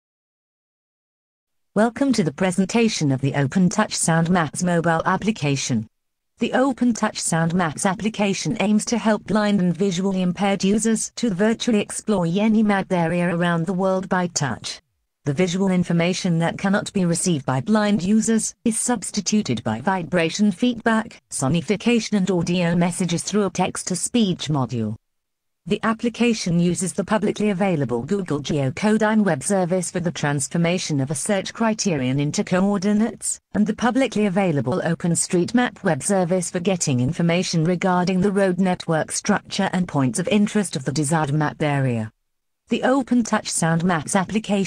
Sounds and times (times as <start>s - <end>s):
Speech synthesizer: 1.8s - 25.0s, 25.7s - 42.1s, 42.7s - 44.6s.